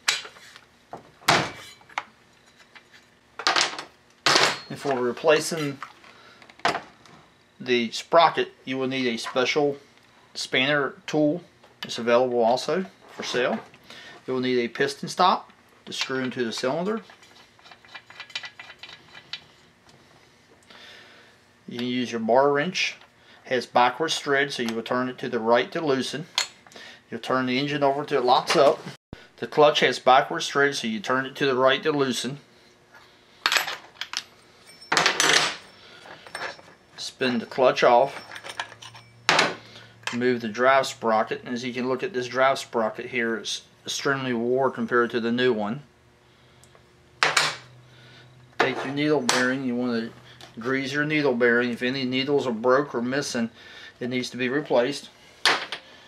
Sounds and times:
Speech: 4.7 - 5.8, 7.6 - 9.8, 10.4 - 13.7, 14.3 - 17.1, 21.7 - 26.3, 27.1 - 32.4, 37.0 - 38.2, 40.1 - 45.9, 48.6 - 55.1.

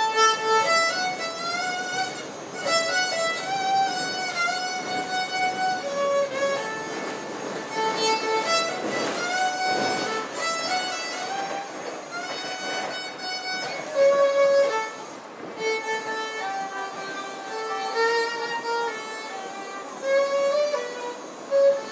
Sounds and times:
Violin, fiddle: 0.0 - 21.9.

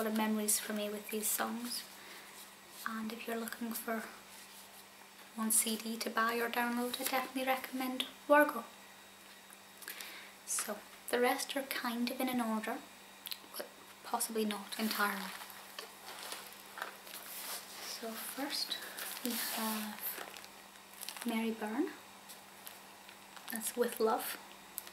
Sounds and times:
Speech: 0.0 - 1.9, 2.8 - 4.2, 5.4 - 8.7, 10.5 - 12.9, 13.5 - 15.4, 17.8 - 20.2, 21.2 - 22.0, 23.5 - 24.4.

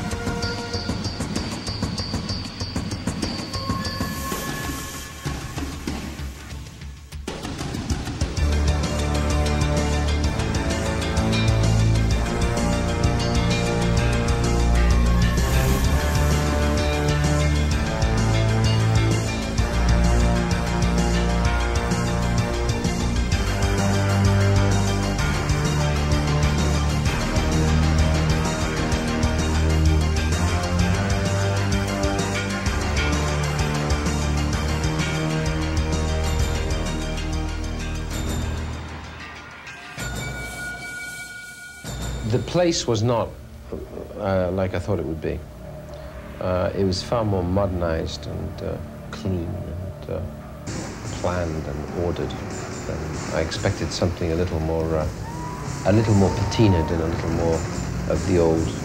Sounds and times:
Music: 0.0 - 58.8.

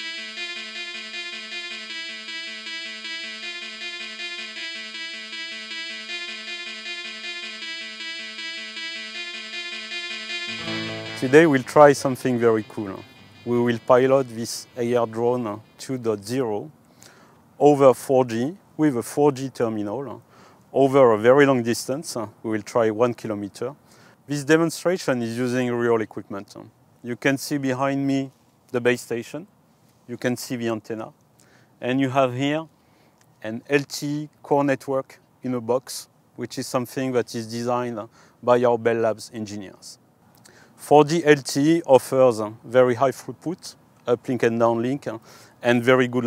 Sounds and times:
Speech: 11.2 - 16.7, 17.6 - 20.2, 20.8 - 29.5, 30.1 - 31.2, 31.8 - 32.7, 33.4 - 40.0, 40.8 - 46.2.

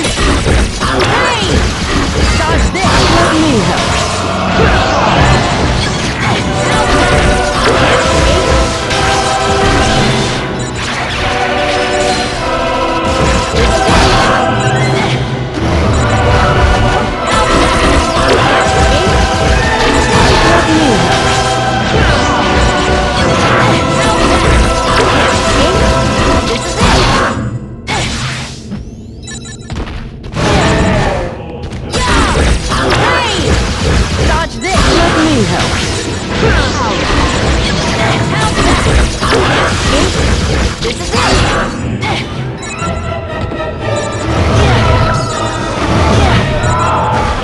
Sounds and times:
Music: 0.0 - 47.4
Speech: 0.8 - 1.6, 2.3 - 3.9, 34.2 - 35.7.

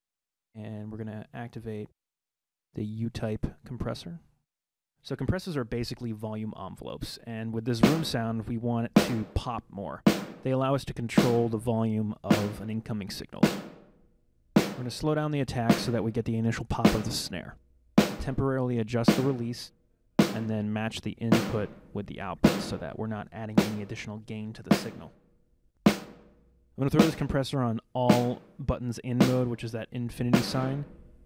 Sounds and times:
Speech: 0.6 - 1.9, 2.8 - 4.2, 5.0 - 13.5, 14.8 - 17.6, 18.2 - 19.7, 20.3 - 25.1, 26.8 - 30.9
Music: 10.1 - 10.5, 13.4 - 13.8, 14.6 - 14.9, 15.7 - 16.0, 18.0 - 18.2, 20.2 - 20.5, 21.3 - 22.8, 25.9 - 26.2, 30.3 - 31.2.

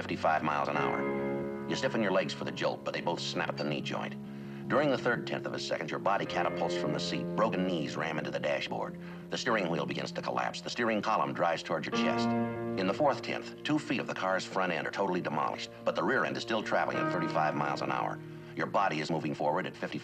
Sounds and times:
Male speech, man speaking: 0.0 - 1.1, 1.7 - 20.0
Music: 0.0 - 20.0
Narration, monologue: 0.0 - 20.0.

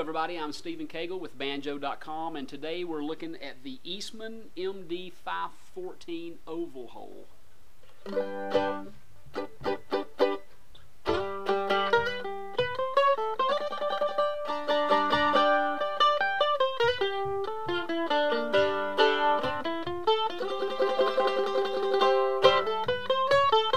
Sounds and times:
Mandolin: 7.8 - 23.7.

